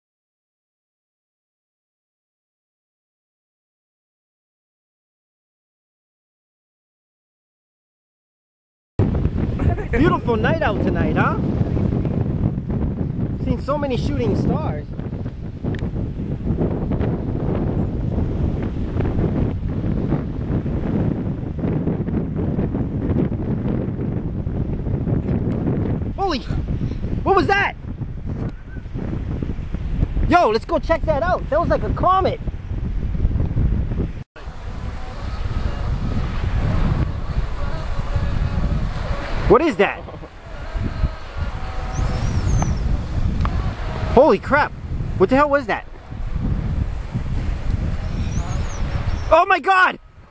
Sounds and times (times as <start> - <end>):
Wind noise (microphone): 9.0 - 50.3.